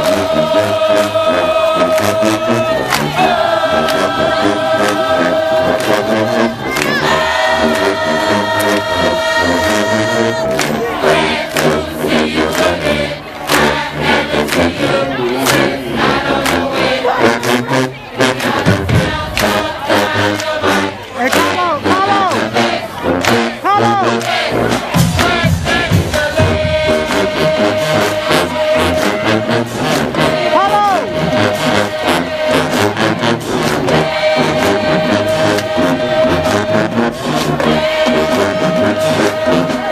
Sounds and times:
Crowd: 0:00.0 - 0:39.9
Music: 0:00.0 - 0:39.9.

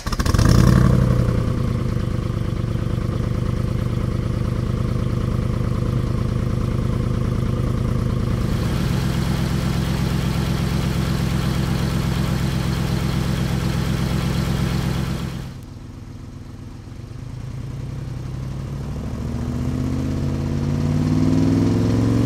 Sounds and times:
Car: 0:00.0 - 0:22.2.

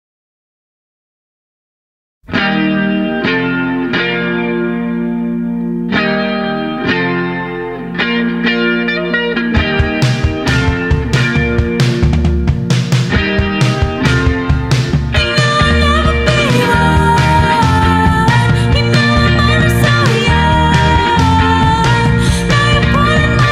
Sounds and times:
Effects unit: 0:02.2 - 0:23.5
Music: 0:02.3 - 0:23.5.

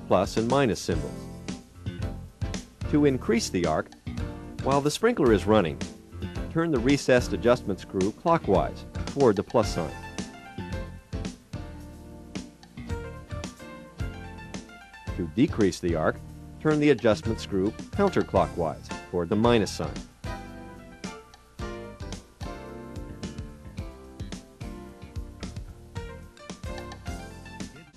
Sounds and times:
Speech: 0:00.0 - 0:01.2, 0:02.9 - 0:03.9, 0:04.6 - 0:05.8, 0:06.5 - 0:10.0, 0:15.2 - 0:20.0
Music: 0:00.0 - 0:27.9.

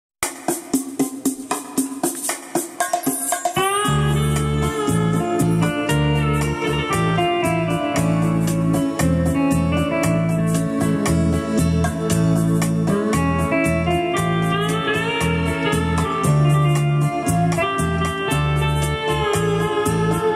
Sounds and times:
Piano: 0:03.6 - 0:20.3.

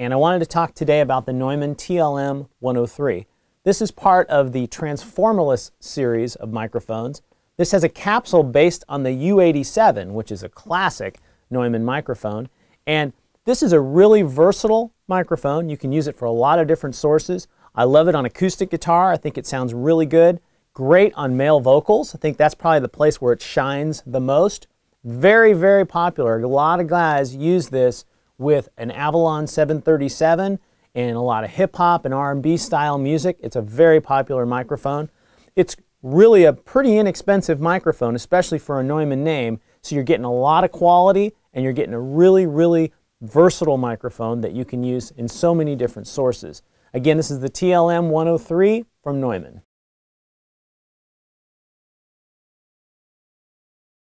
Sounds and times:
Speech: 0:00.0 - 0:49.7.

